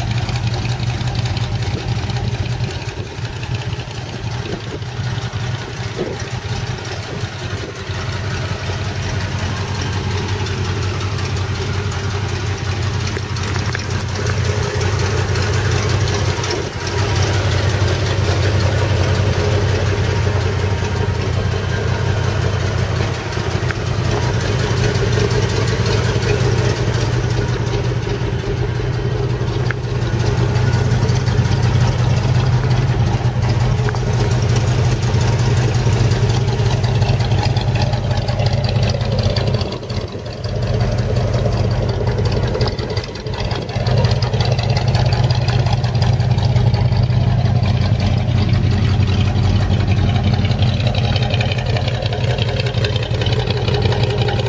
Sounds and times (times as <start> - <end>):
Car: 0.0 - 54.4.